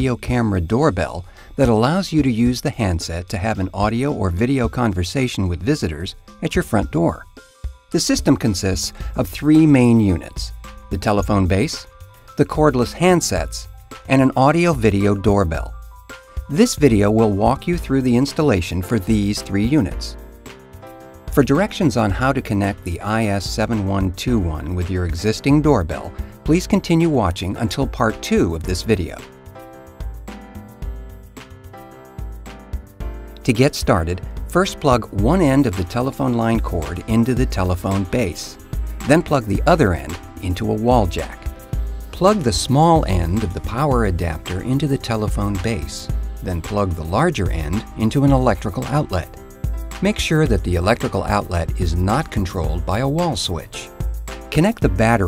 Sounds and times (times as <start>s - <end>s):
Speech: 0.0s - 7.3s, 8.0s - 15.7s, 16.5s - 20.2s, 21.4s - 29.3s, 33.4s - 41.5s, 42.2s - 49.4s, 50.0s - 53.9s, 54.5s - 55.2s
Music: 0.0s - 55.2s.